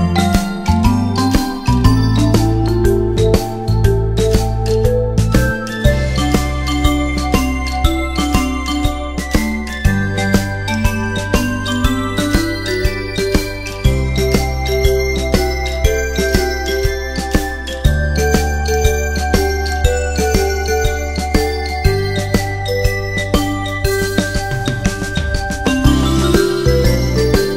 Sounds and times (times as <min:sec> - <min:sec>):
Jingle, tinkle: 0:00.0 - 0:27.5.